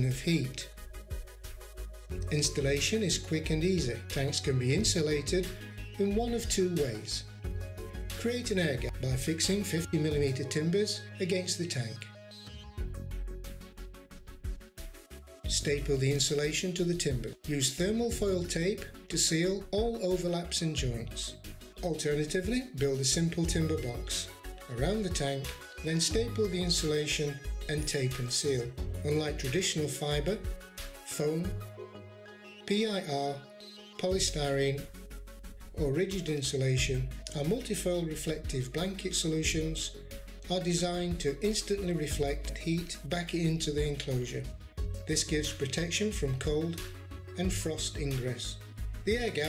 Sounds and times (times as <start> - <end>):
Speech: 0.0 - 0.7, 2.3 - 7.3, 8.2 - 12.1, 15.5 - 30.4, 31.1 - 31.6, 32.7 - 33.4, 34.0 - 34.9, 35.8 - 44.5, 45.1 - 49.4
Music: 0.0 - 49.4.